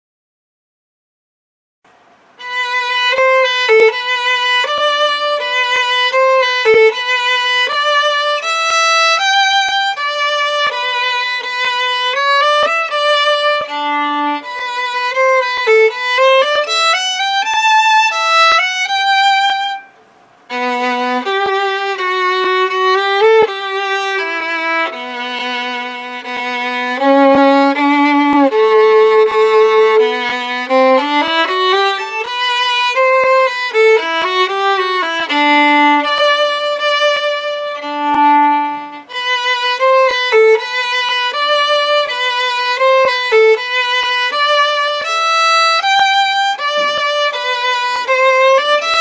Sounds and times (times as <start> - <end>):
Violin, fiddle: 2.4 - 49.0.